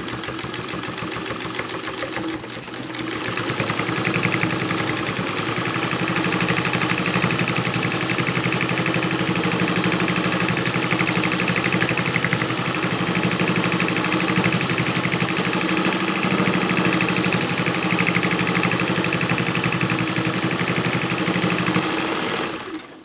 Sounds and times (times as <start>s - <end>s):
Sewing machine: 0.0s - 23.0s.